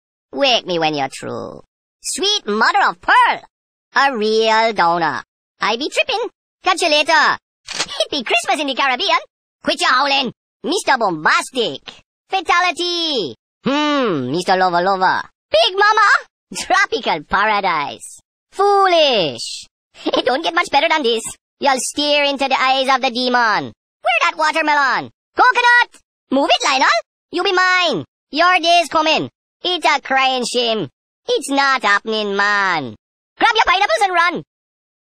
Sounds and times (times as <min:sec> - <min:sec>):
Speech: 0:00.4 - 0:34.5.